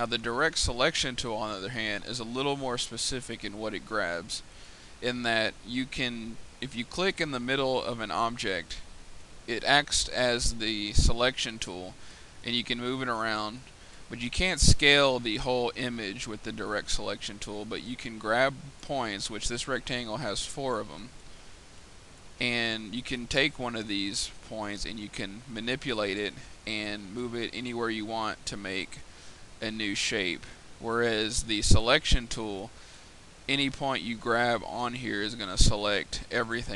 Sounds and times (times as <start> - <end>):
Speech: 0.0 - 8.9, 9.5 - 21.2, 22.4 - 29.0, 29.6 - 32.7, 33.5 - 36.7.